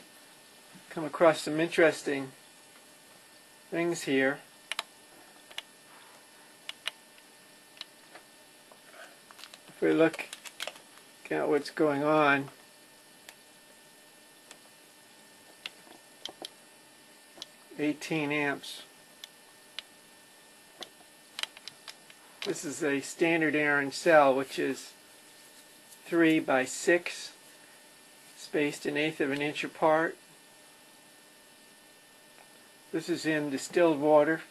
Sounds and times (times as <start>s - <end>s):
Speech: 0.9s - 2.4s, 3.7s - 4.4s, 9.8s - 10.3s, 11.2s - 12.6s, 17.7s - 18.9s, 22.5s - 25.0s, 26.1s - 27.4s, 28.4s - 30.2s, 32.9s - 34.5s.